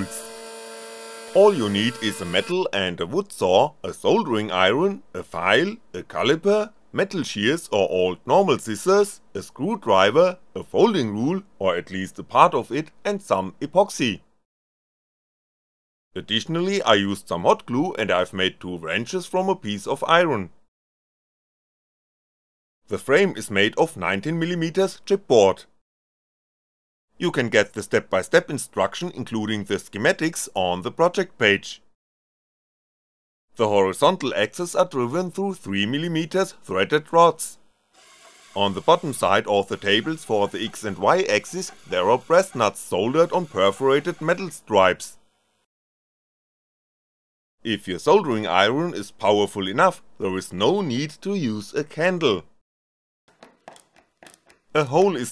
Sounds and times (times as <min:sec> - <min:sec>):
Speech: 0:00.0 - 0:00.2, 0:01.4 - 0:14.2, 0:16.2 - 0:20.6, 0:22.9 - 0:25.7, 0:27.2 - 0:31.9, 0:33.6 - 0:37.6, 0:38.6 - 0:45.2, 0:47.7 - 0:52.5, 0:54.8 - 0:55.3.